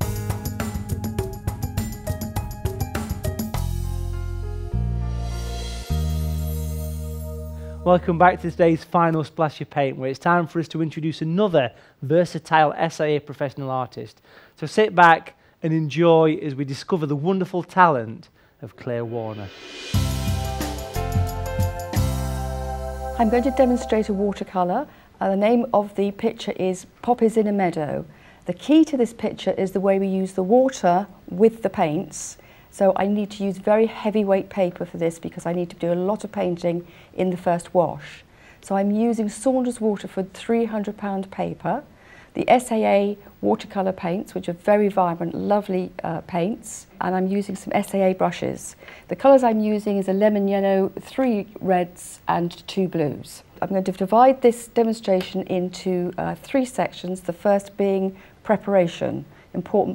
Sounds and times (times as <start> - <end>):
Speech: 7.8 - 19.6, 23.2 - 59.9.